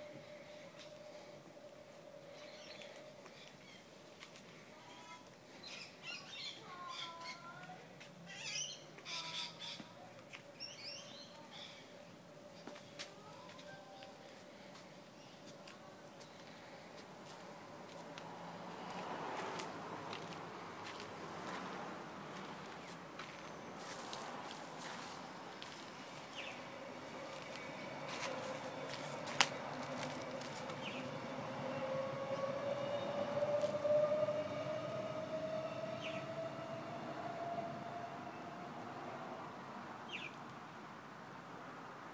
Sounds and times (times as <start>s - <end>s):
Outside, rural or natural: 0.0s - 42.1s.